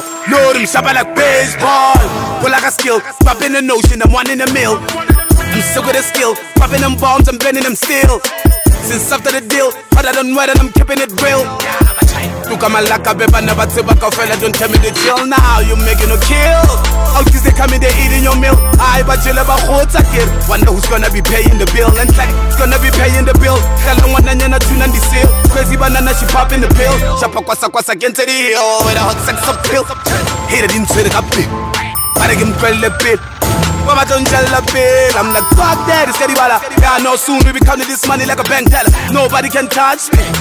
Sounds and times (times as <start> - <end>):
Soundtrack music: 0.0 - 28.1, 28.7 - 40.4
Ska: 0.0 - 40.4.